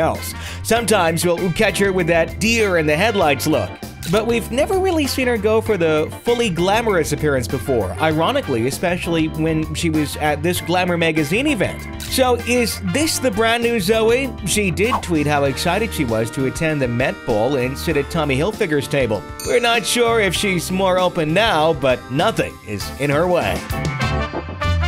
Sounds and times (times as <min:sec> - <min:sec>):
Speech: 0:00.0 - 0:23.7
Music: 0:00.0 - 0:24.8.